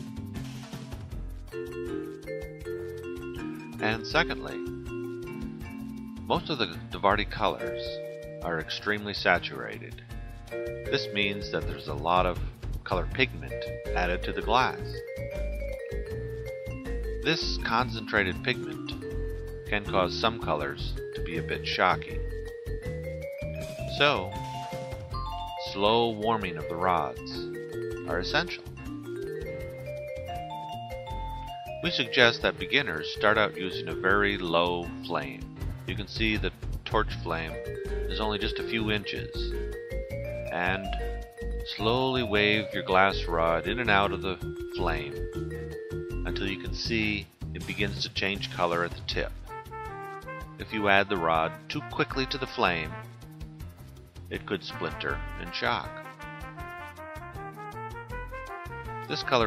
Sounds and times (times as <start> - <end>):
Music: 0.0 - 59.4
Speech: 3.8 - 4.6, 6.3 - 10.0, 10.9 - 15.0, 17.3 - 19.0, 19.7 - 22.2, 23.9 - 24.4, 25.6 - 27.5, 28.1 - 28.6, 31.8 - 39.5, 40.5 - 41.0, 41.7 - 45.2, 46.3 - 49.4, 50.6 - 53.0, 54.3 - 56.0, 59.1 - 59.4.